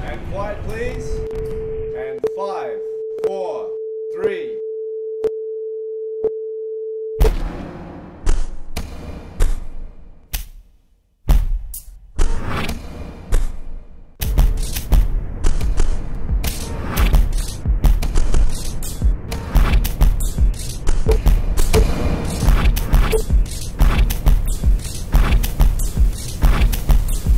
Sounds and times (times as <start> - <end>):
Speech: 0.0 - 1.2, 1.9 - 4.6.